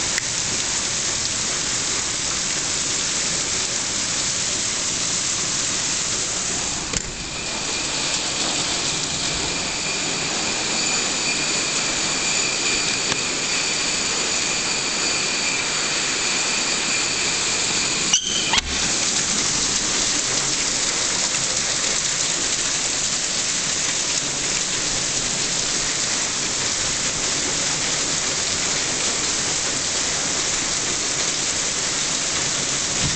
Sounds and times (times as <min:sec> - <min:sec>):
Rain: 0:00.0 - 0:33.1.